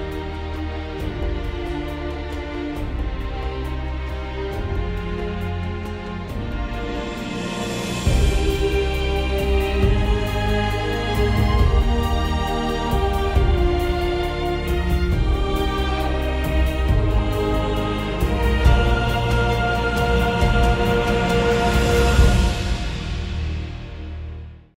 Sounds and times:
Music: 0.0s - 24.7s.

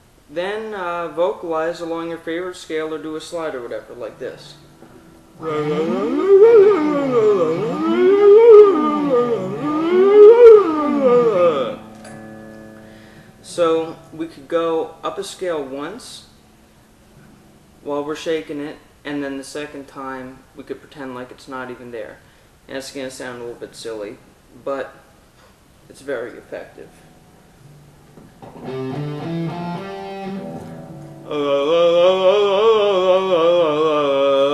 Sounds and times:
Speech: 0.3s - 4.6s, 13.5s - 16.3s, 17.9s - 25.1s, 25.9s - 27.0s
Music: 4.6s - 14.2s, 27.6s - 31.7s.

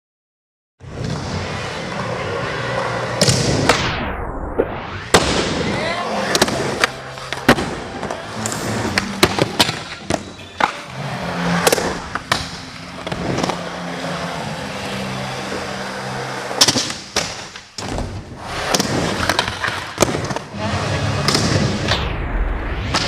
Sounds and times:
Inside, large room or hall: 0.8s - 4.0s, 4.9s - 22.0s, 22.8s - 23.0s
Music: 5.1s - 23.0s.

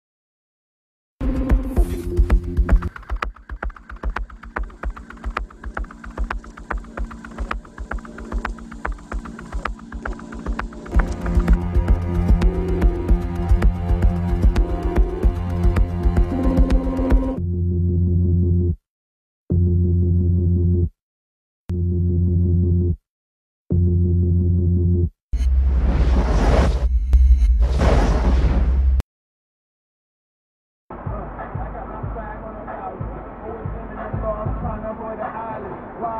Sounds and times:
Music: 1.2s - 18.8s, 30.9s - 35.6s.

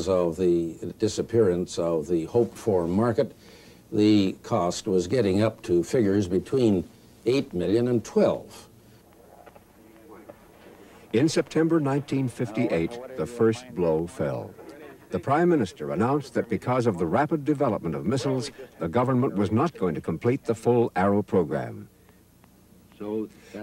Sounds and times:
Speech: 0.0s - 8.7s, 11.1s - 21.9s.

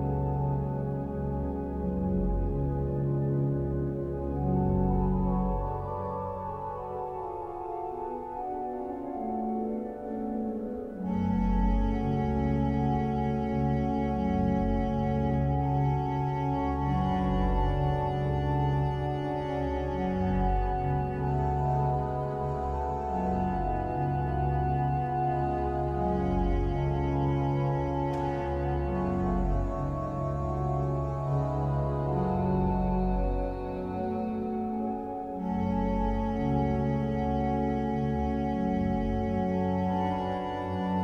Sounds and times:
Music: 0.0s - 41.0s.

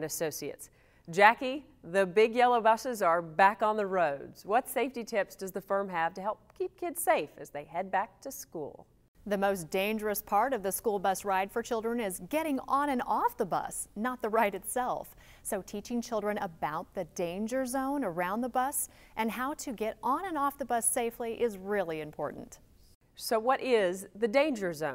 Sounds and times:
Speech: 0.0s - 22.6s, 23.2s - 24.9s.

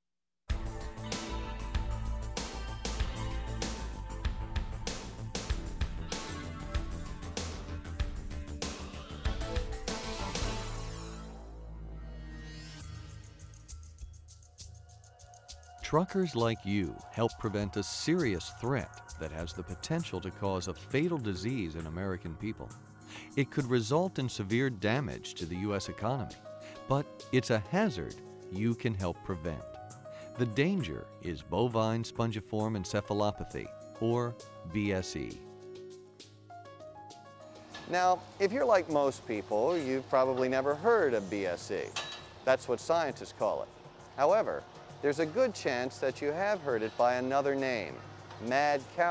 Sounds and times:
Music: 0.5s - 49.1s
Speech: 15.8s - 29.7s, 30.4s - 35.4s, 37.9s - 49.1s.

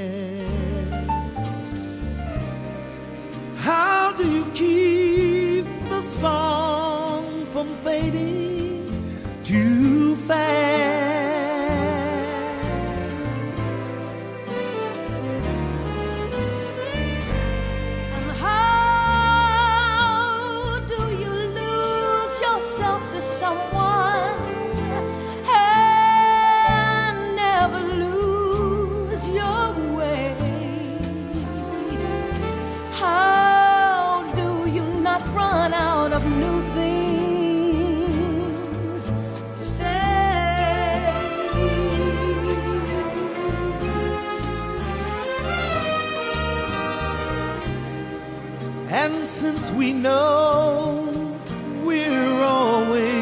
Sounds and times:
Tender music: 0.0s - 53.2s.

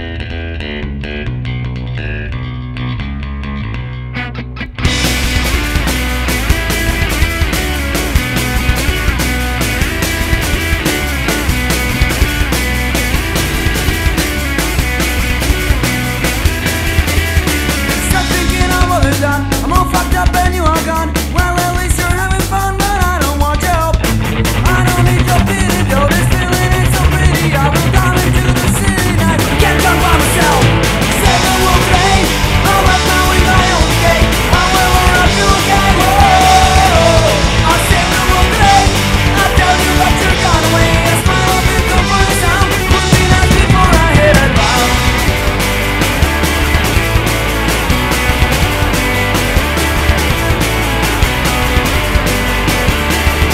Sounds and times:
Blues: 0.0s - 53.5s.

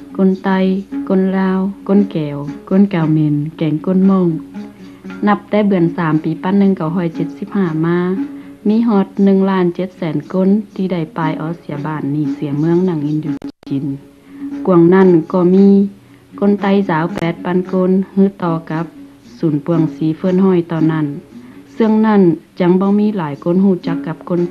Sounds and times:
Music: 0.0s - 24.5s
Narration, monologue: 0.0s - 24.5s.

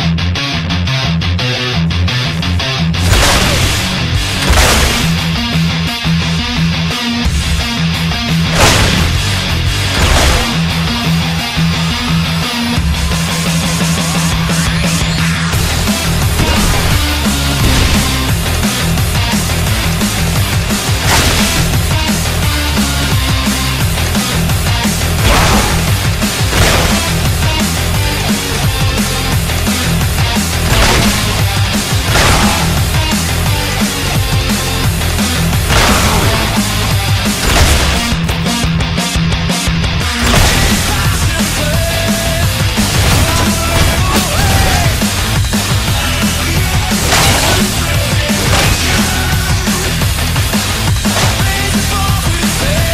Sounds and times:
Music: 0.0s - 52.9s.

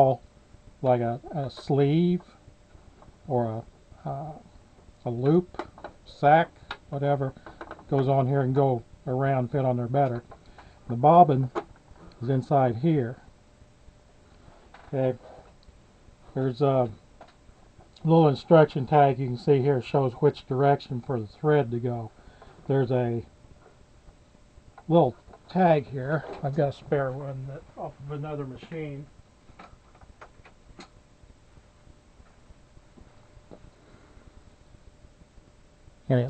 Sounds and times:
Speech: 0.0s - 0.2s, 0.8s - 2.3s, 3.3s - 5.5s, 6.1s - 10.2s, 10.9s - 11.6s, 12.2s - 13.2s, 14.9s - 15.3s, 16.3s - 17.0s, 18.0s - 22.1s, 22.7s - 23.3s, 24.9s - 29.1s, 36.1s - 36.2s.

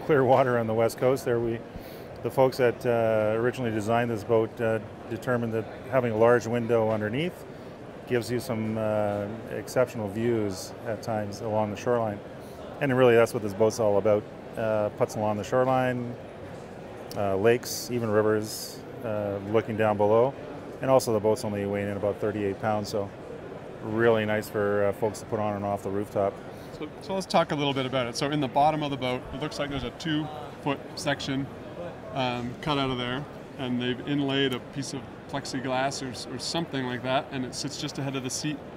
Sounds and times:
Speech: 0.0s - 1.6s, 2.2s - 7.4s, 8.1s - 12.2s, 12.8s - 16.2s, 17.2s - 23.1s, 23.8s - 38.6s.

